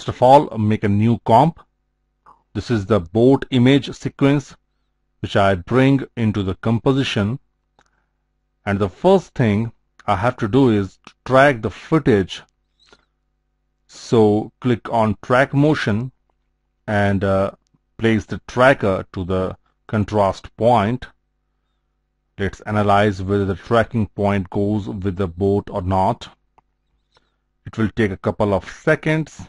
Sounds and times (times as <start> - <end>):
Speech: 0.0 - 1.7, 2.5 - 4.6, 5.2 - 7.4, 8.6 - 12.5, 13.9 - 16.2, 16.9 - 21.2, 22.4 - 26.4, 27.7 - 29.4.